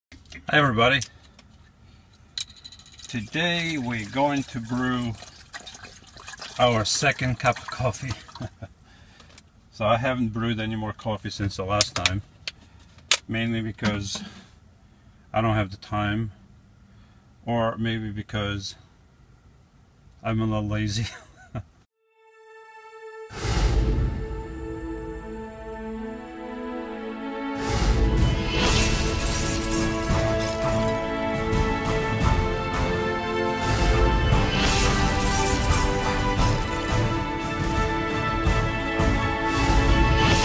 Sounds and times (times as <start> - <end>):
Speech: 0.4 - 1.1, 3.1 - 5.2, 6.6 - 8.3, 9.8 - 12.2, 13.3 - 14.3, 15.3 - 16.4, 17.4 - 18.8, 20.2 - 21.2
Liquid: 3.2 - 8.6.